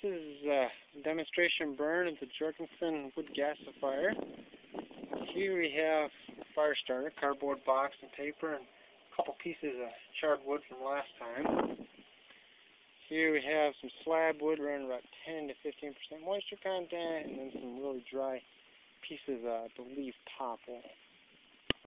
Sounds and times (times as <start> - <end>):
Speech: 0.0 - 4.2, 5.2 - 11.6, 13.0 - 18.4, 19.0 - 21.0.